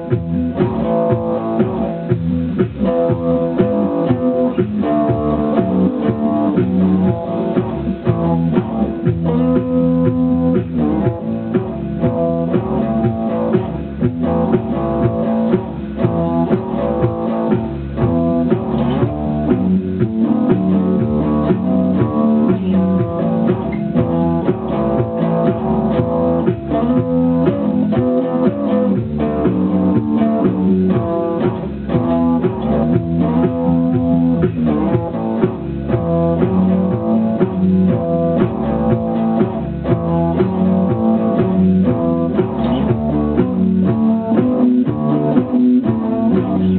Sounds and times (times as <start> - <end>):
Bass guitar: 0.0 - 46.7
Rock and roll: 0.0 - 46.7.